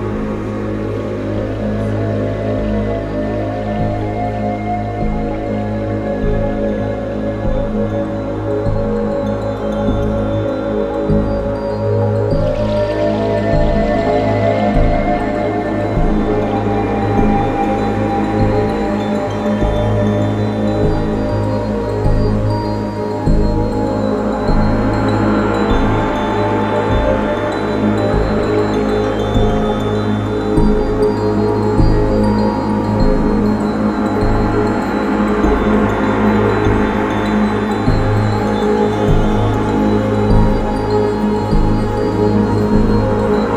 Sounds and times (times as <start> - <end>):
Trance music: 0.0 - 43.5.